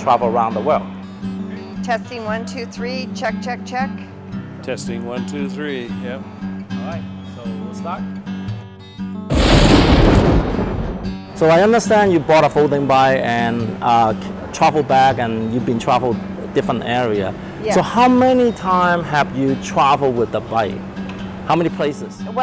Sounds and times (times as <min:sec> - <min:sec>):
Music: 0:00.0 - 0:22.4
Explosion: 0:09.3 - 0:11.4
Speech: 0:17.6 - 0:18.5.